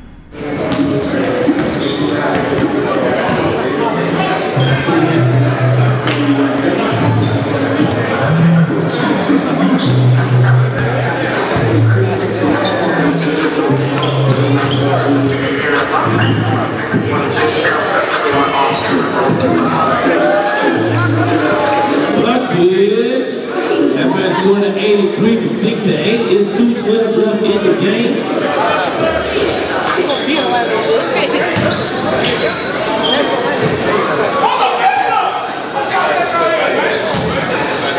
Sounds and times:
Speech: 0.5s - 37.9s.

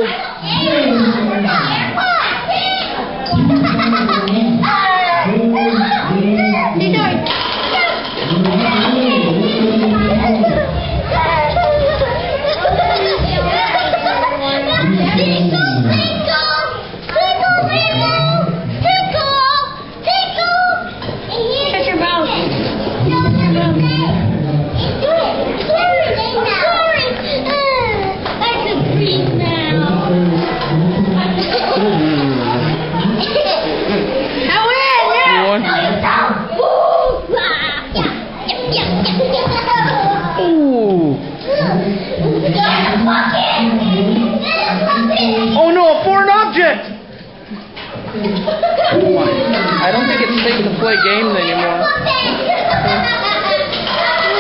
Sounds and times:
Child speech, kid speaking: 0.0s - 3.1s, 4.5s - 30.4s, 31.2s - 33.8s, 34.4s - 40.7s, 41.5s - 46.9s, 48.2s - 54.4s.

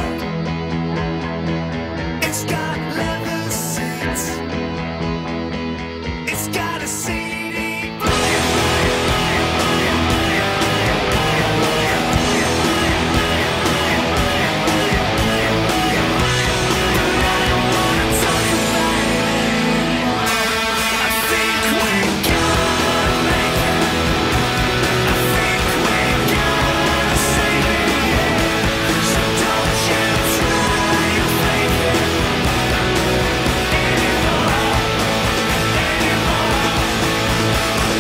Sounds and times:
Electric guitar: 0.0s - 38.0s.

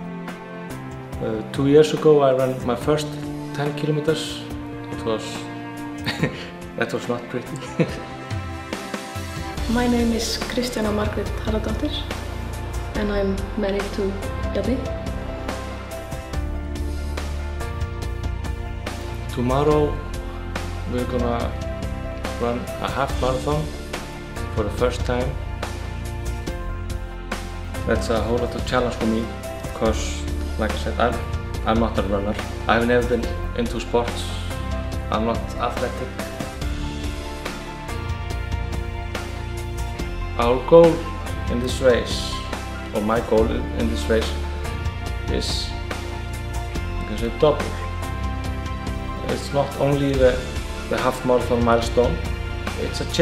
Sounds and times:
Music: 0.0s - 53.2s.

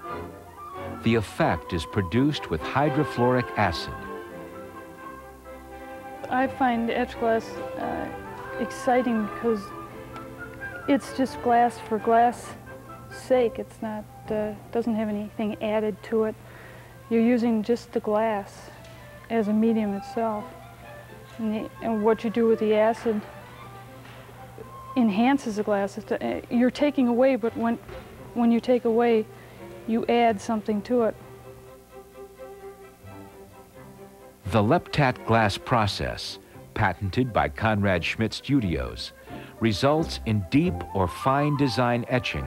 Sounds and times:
Music: 0.0s - 42.4s
Speech: 1.0s - 4.1s, 6.3s - 9.8s, 10.9s - 12.6s, 13.2s - 16.4s, 17.1s - 20.5s, 21.4s - 23.3s, 25.0s - 27.8s, 28.4s - 29.3s, 29.9s - 31.2s, 34.5s - 42.4s.

